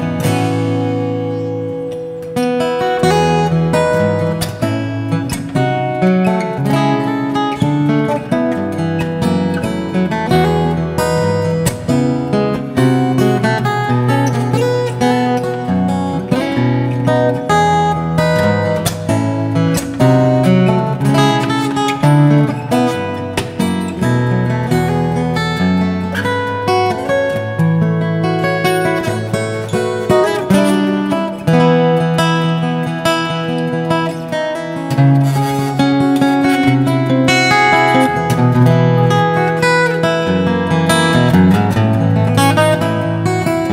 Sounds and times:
Music: 0.0s - 43.7s.

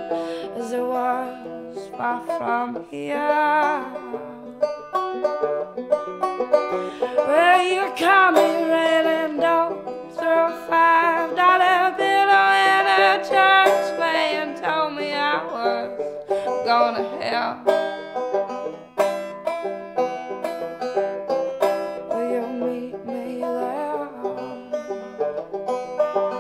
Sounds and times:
Music: 0.0s - 26.4s.

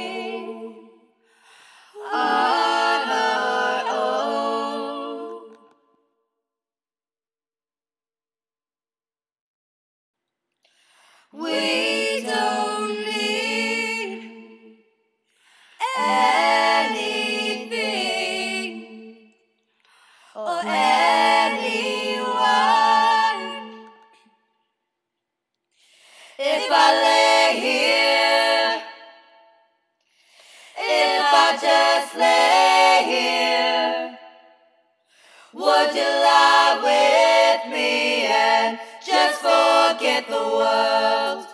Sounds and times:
Choir: 0.0s - 6.3s, 11.0s - 24.8s, 25.8s - 41.5s.

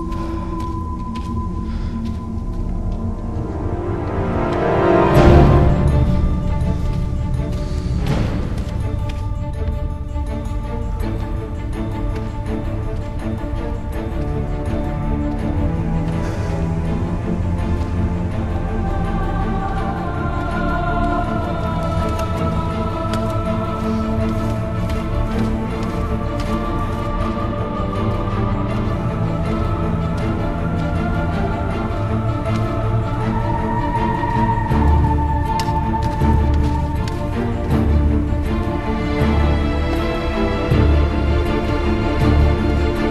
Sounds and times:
Tender music: 0.0s - 43.1s.

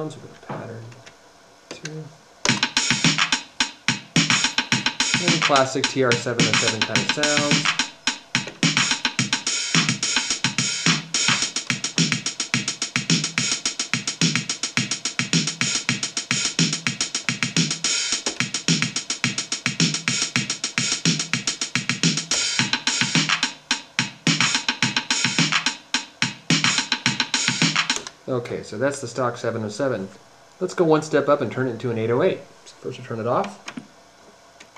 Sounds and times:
Speech: 0.0s - 1.0s, 1.7s - 2.2s, 5.2s - 7.6s, 28.3s - 33.6s
Music: 2.4s - 28.1s.

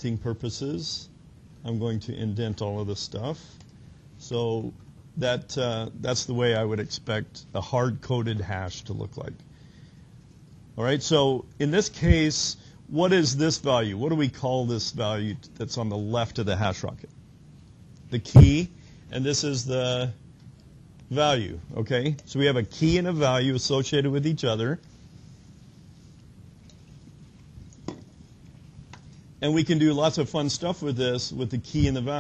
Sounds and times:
Speech: 0.0s - 3.6s, 4.2s - 9.4s, 10.8s - 17.1s, 18.1s - 20.2s, 21.1s - 24.8s, 29.4s - 32.2s.

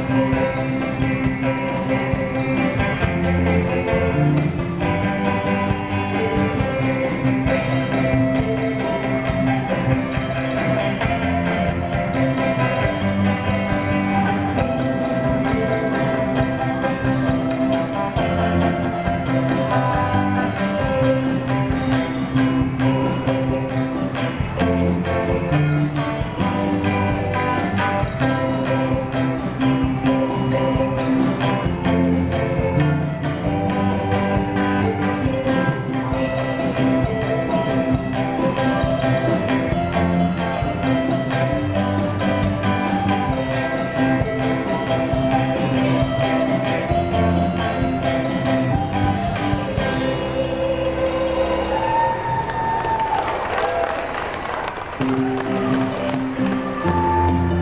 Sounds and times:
Jingle (music): 0.0s - 52.1s, 55.0s - 57.6s.

